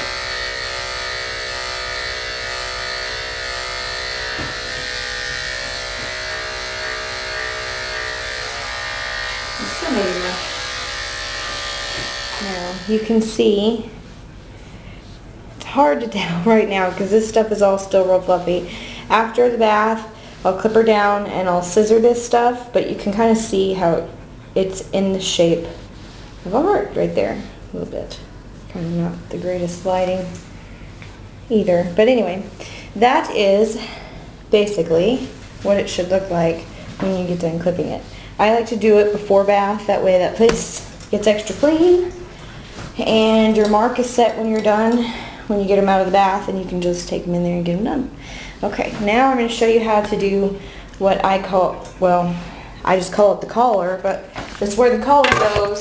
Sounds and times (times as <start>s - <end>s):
Electric shaver, electric razor: 0.0s - 13.3s
Speech: 9.6s - 10.4s, 12.4s - 14.0s, 15.6s - 25.8s, 26.4s - 30.4s, 31.5s - 42.2s, 43.0s - 55.8s.